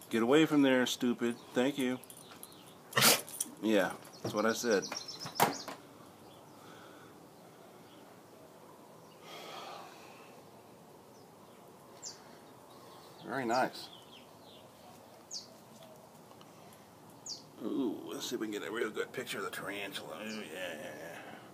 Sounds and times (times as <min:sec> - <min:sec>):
Bird: 0:04.0 - 0:06.8, 0:11.1 - 0:16.2.